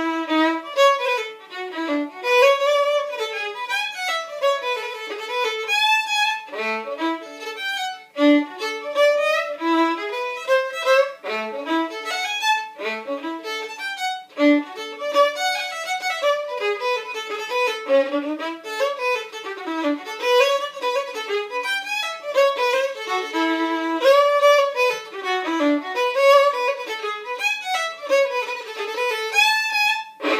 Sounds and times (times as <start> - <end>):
Violin, fiddle: 0.0 - 30.3.